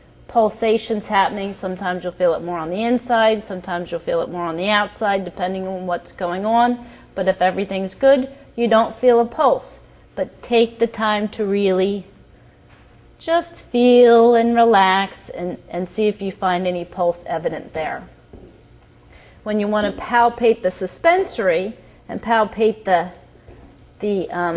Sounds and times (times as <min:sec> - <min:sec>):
Speech: 0:00.3 - 0:12.1, 0:13.2 - 0:18.1, 0:19.5 - 0:23.2, 0:24.0 - 0:24.5.